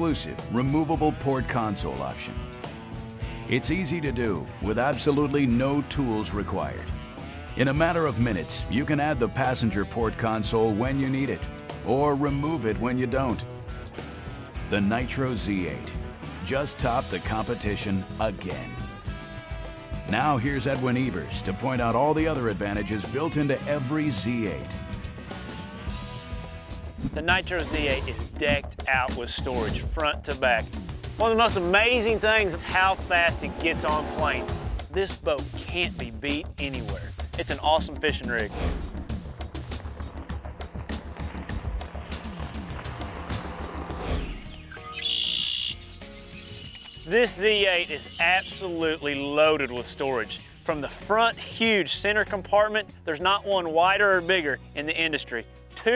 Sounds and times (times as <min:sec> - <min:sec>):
Speech: 0:00.0 - 0:02.4, 0:03.5 - 0:06.9, 0:07.6 - 0:13.5, 0:14.7 - 0:18.8, 0:20.1 - 0:24.8, 0:27.1 - 0:38.6, 0:47.1 - 0:55.9
Music: 0:00.0 - 0:55.9.